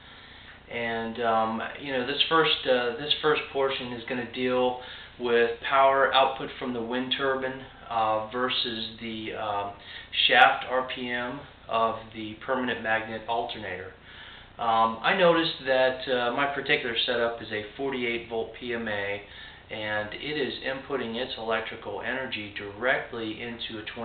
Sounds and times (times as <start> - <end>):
Speech: 0.7 - 14.0, 14.6 - 24.0.